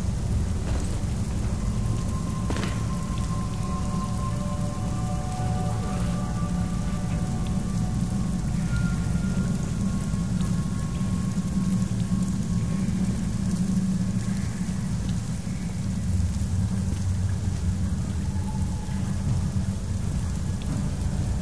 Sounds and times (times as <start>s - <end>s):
Music: 0.0s - 21.4s.